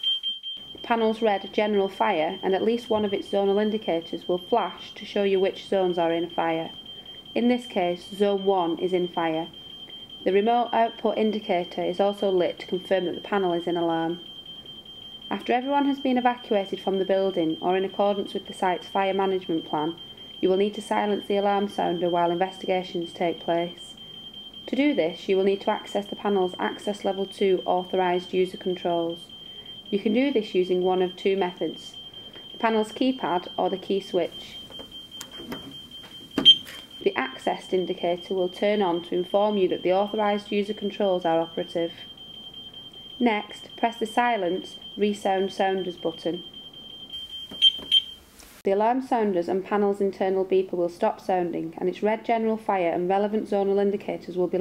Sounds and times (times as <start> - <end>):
Alarm clock: 0.0 - 48.2
Fire alarm: 0.0 - 48.3
Speech: 0.8 - 6.8, 7.4 - 9.5, 10.2 - 14.2, 15.3 - 24.0, 24.7 - 29.3, 29.9 - 32.0, 32.6 - 34.6, 37.0 - 42.1, 43.2 - 46.4, 48.7 - 54.6.